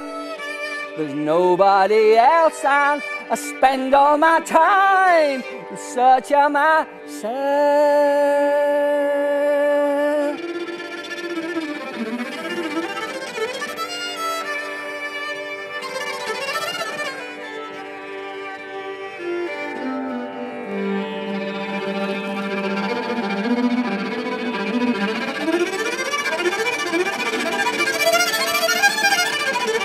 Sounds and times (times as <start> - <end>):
Music: 0.0 - 29.8.